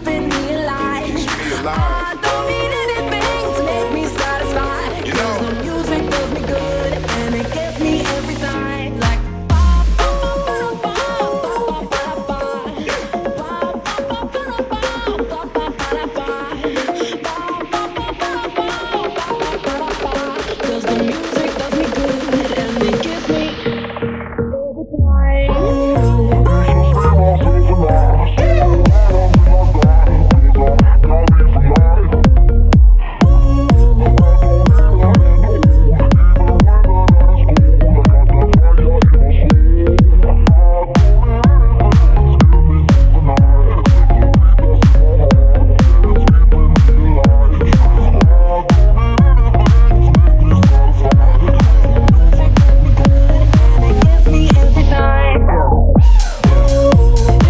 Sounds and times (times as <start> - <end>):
House music: 0.0 - 57.5
Synthesizer: 0.0 - 57.5.